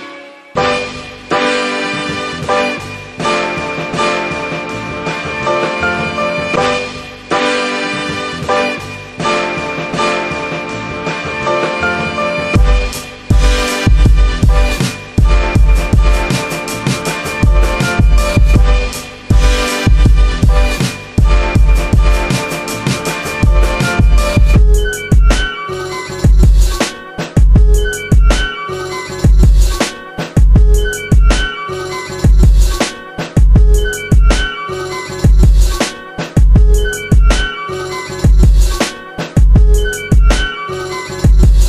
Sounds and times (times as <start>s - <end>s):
Electronica: 0.0s - 41.6s.